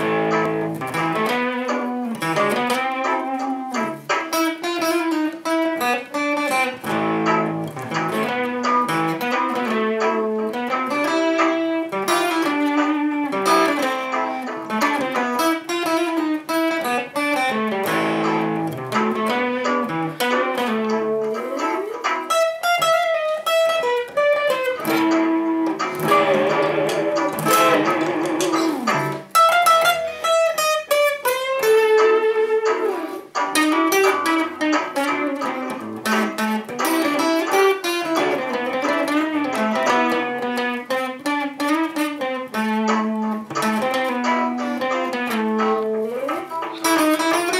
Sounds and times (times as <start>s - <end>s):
Strum: 0.0s - 47.5s.